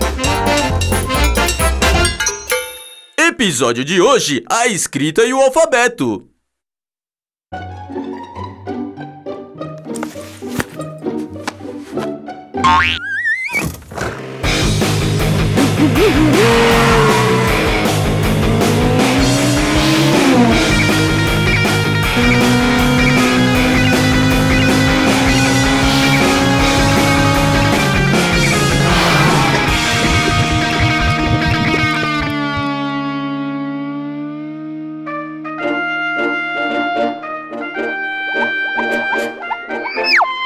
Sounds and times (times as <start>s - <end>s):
Music: 0.0s - 3.2s, 7.5s - 12.7s, 13.6s - 32.3s, 35.0s - 40.4s
Speech: 3.2s - 6.3s.